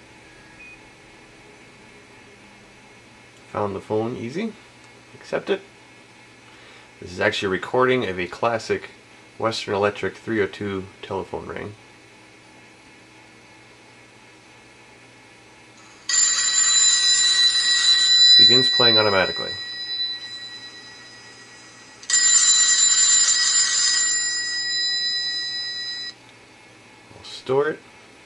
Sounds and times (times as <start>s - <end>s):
Inside, small room: 0.0s - 28.2s
Speech: 3.5s - 4.6s, 5.2s - 5.7s, 7.0s - 11.8s, 18.4s - 19.6s, 27.1s - 27.9s.